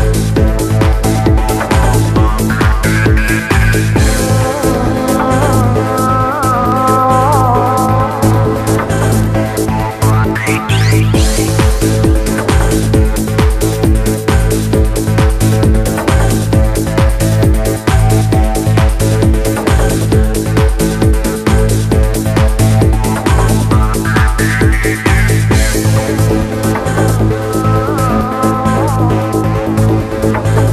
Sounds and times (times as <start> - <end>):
Music: 0.0 - 30.7.